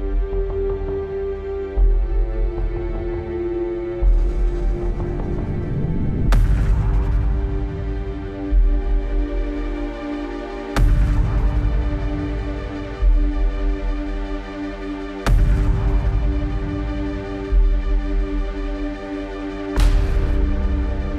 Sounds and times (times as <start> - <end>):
Music: 0.0 - 21.1.